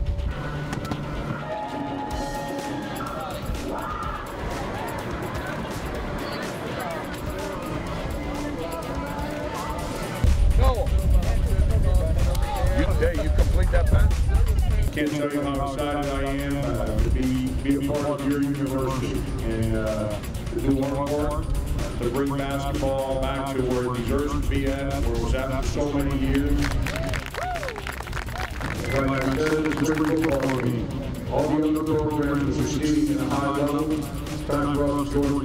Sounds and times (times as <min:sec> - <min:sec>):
Crowd: 0:00.0 - 0:21.0, 0:22.0 - 0:35.4.